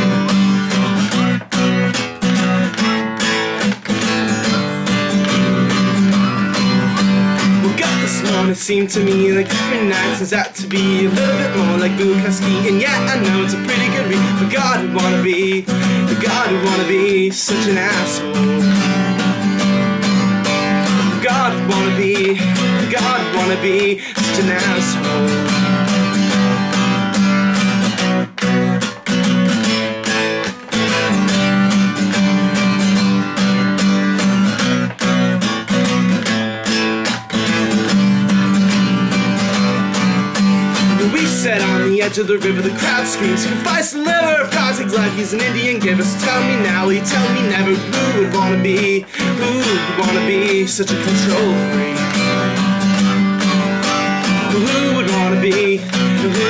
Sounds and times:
Music: 0.0s - 56.5s.

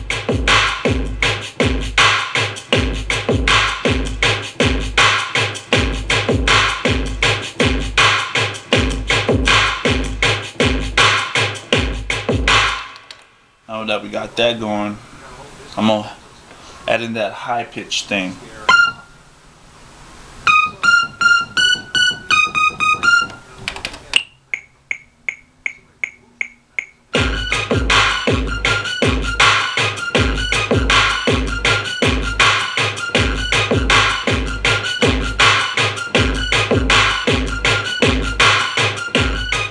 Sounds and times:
Dubstep: 0.0s - 12.9s, 27.2s - 39.7s
Hip hop music: 0.0s - 13.0s, 20.5s - 23.6s, 24.5s - 39.7s
Speech: 13.7s - 18.7s, 22.1s - 24.2s
Piano: 20.4s - 23.5s.

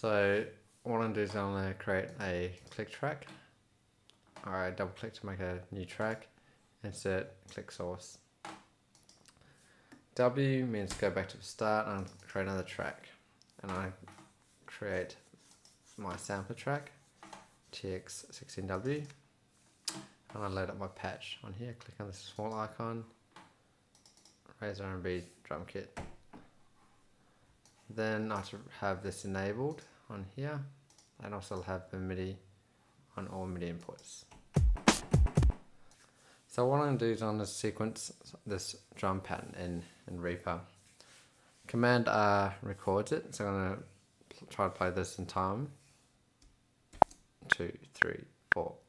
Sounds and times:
Speech: 0.0s - 3.3s, 4.4s - 8.3s, 10.2s - 14.1s, 14.7s - 15.3s, 16.0s - 17.0s, 17.7s - 19.2s, 20.3s - 23.2s, 24.5s - 26.0s, 27.9s - 32.5s, 33.2s - 34.3s, 36.5s - 40.7s, 41.7s - 45.8s, 47.5s - 48.8s
Clicking: 8.9s - 9.4s, 23.9s - 24.4s, 30.9s - 31.1s.

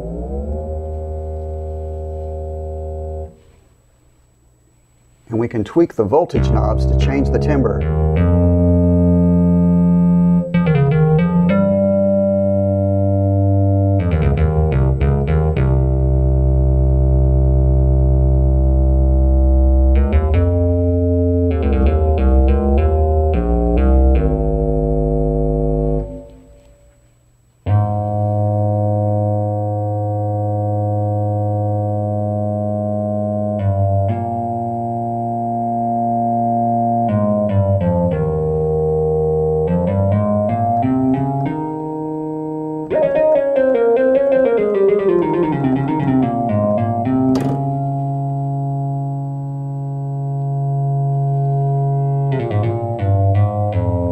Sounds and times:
Speech: 5.3s - 7.8s
Sampler: 6.1s - 15.0s, 38.8s - 51.0s.

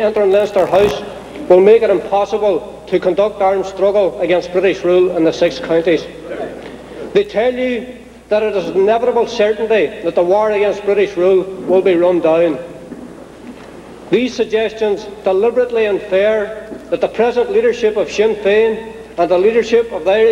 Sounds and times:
Male speech, man speaking: 0.0s - 6.6s, 7.2s - 12.6s, 14.2s - 20.3s
Narration, monologue: 0.0s - 20.3s.

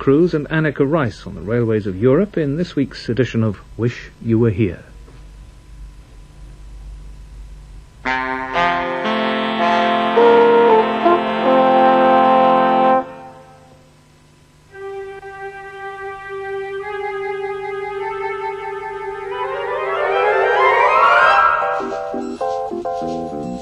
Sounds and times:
Music: 8.0s - 13.8s, 14.7s - 23.6s.

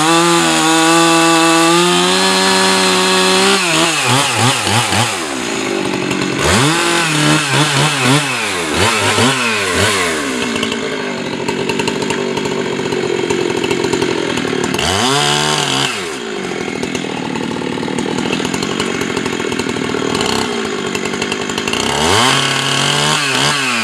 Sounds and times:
Chainsaw: 0.0s - 23.8s.

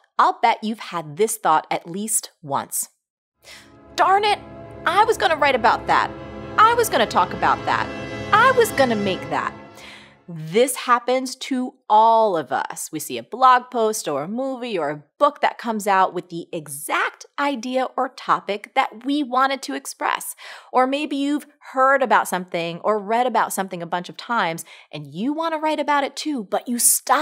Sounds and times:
Speech: 0.0s - 2.9s, 4.0s - 9.5s, 10.3s - 27.2s
Music: 3.5s - 10.4s.

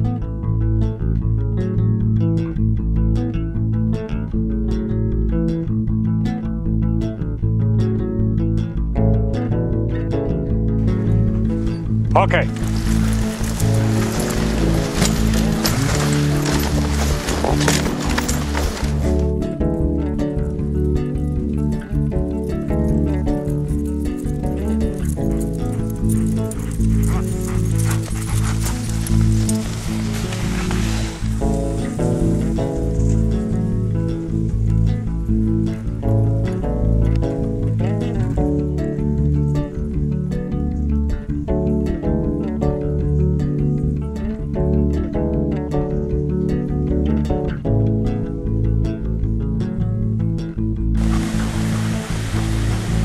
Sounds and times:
Music: 0.0s - 53.0s.

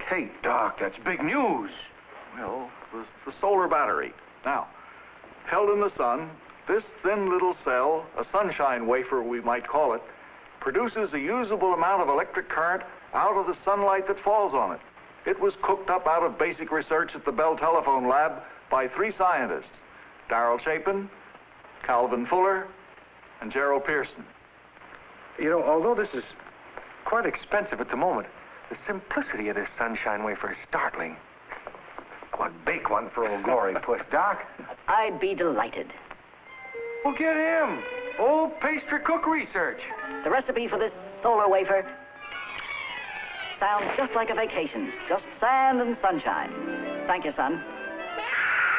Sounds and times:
Speech: 0.0s - 4.8s, 5.5s - 21.2s, 21.8s - 22.8s, 23.4s - 24.3s, 25.4s - 26.4s, 27.0s - 31.2s, 32.3s - 36.0s, 43.6s - 46.5s.

